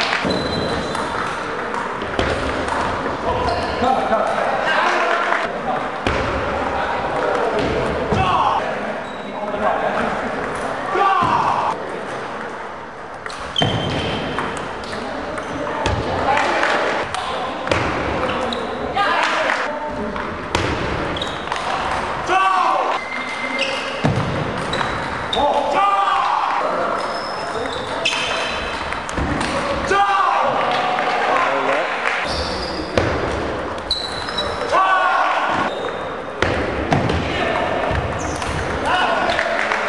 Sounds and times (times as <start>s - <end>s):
Speech: 3.2s - 12.0s, 14.9s - 20.3s, 29.4s - 32.2s.